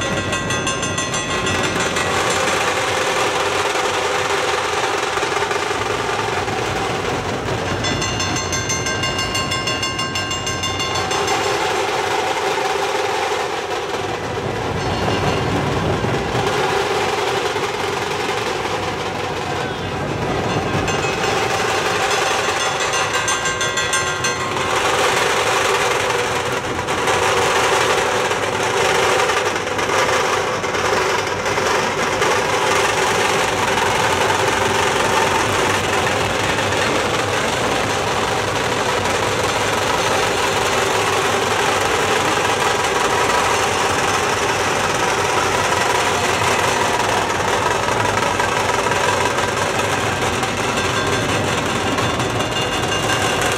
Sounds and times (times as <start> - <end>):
Outside, rural or natural: 0.0 - 53.5.